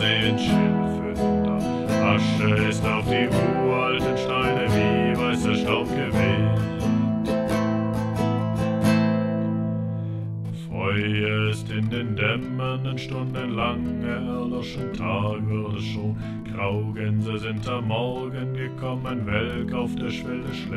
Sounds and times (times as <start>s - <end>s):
Music: 0.0s - 20.7s.